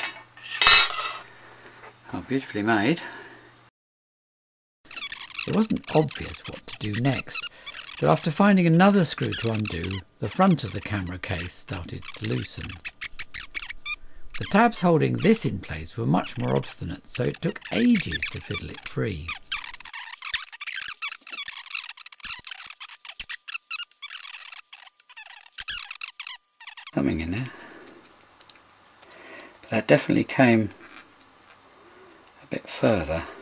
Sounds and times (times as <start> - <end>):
Speech: 2.1 - 3.1, 5.5 - 7.4, 8.0 - 12.8, 14.4 - 19.4, 27.0 - 27.5, 29.7 - 30.8, 32.4 - 33.3.